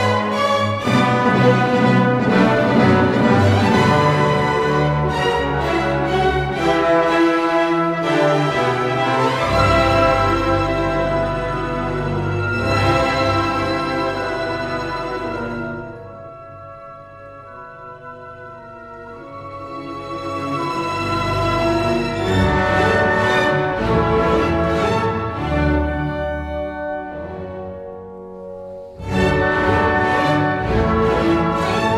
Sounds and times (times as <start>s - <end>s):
Music: 0.0s - 31.9s.